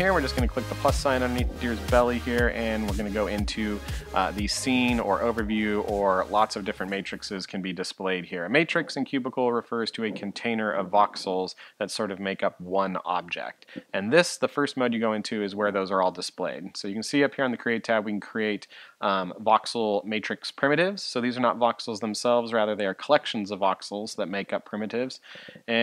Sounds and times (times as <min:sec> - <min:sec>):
Speech: 0:00.0 - 0:25.8.